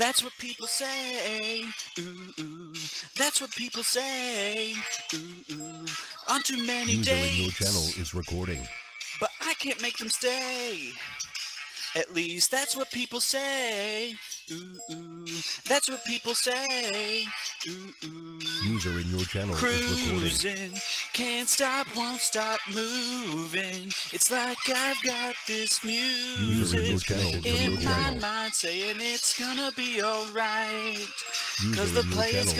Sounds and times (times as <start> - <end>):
Male singing: 0.0 - 11.1, 11.8 - 32.5
Music: 0.0 - 32.5
Speech: 6.8 - 9.6, 18.6 - 20.6, 26.4 - 28.3, 31.6 - 32.5.